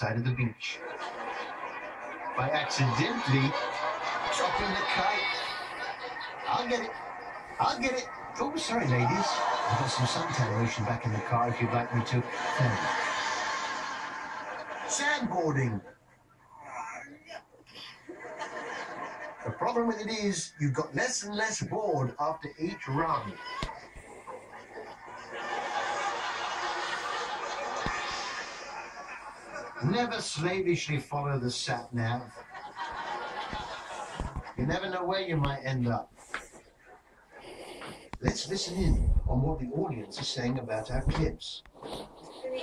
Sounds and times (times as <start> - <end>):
Speech: 0.0 - 0.9, 2.4 - 5.7, 6.5 - 7.0, 7.6 - 12.9, 14.9 - 15.9, 19.4 - 23.6, 29.8 - 32.4, 34.6 - 36.1, 38.2 - 41.6.